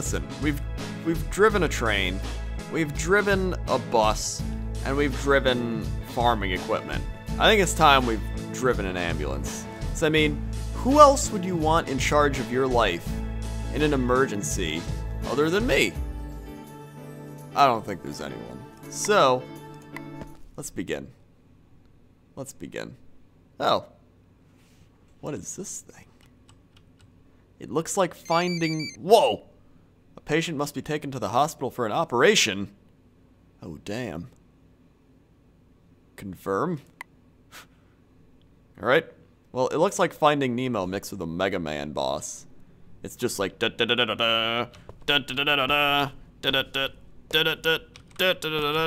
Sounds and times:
Speech: 0.0 - 13.1, 13.7 - 16.0, 17.6 - 19.5, 20.6 - 21.2, 22.4 - 23.0, 23.6 - 24.0, 25.2 - 26.2, 27.6 - 29.6, 30.2 - 32.8, 33.6 - 34.4, 36.2 - 36.9, 38.8 - 48.8.

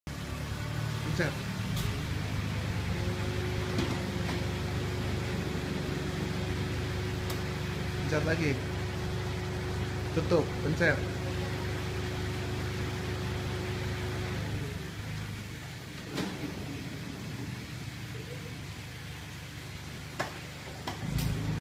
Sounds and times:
Sliding door: 1.5 - 5.0, 14.3 - 18.1, 20.7 - 21.6.

